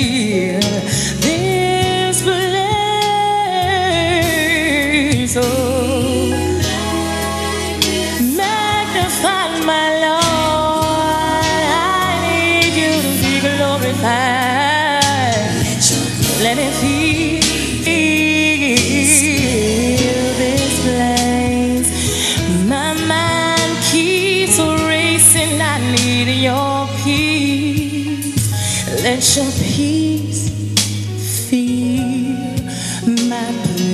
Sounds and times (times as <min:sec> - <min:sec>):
Singing: 0:00.0 - 0:28.2
Music: 0:00.0 - 0:33.9.